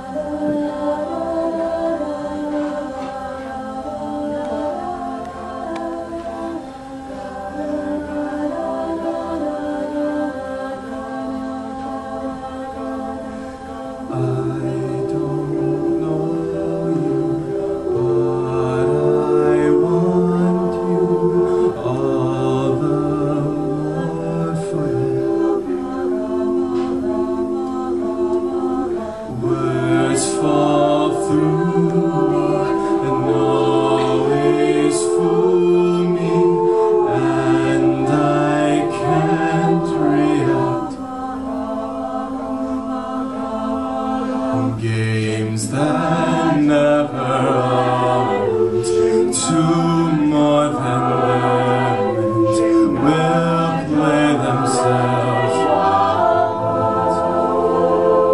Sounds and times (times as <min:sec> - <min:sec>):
Choir: 0:00.0 - 0:58.3.